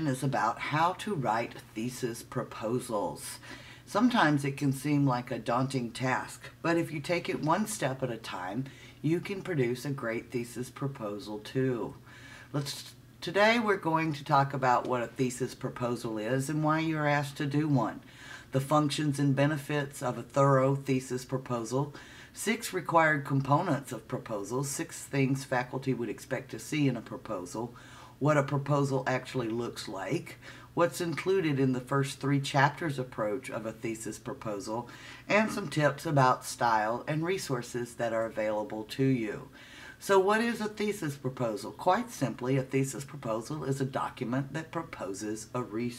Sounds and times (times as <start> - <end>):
Speech: 0.0 - 45.9.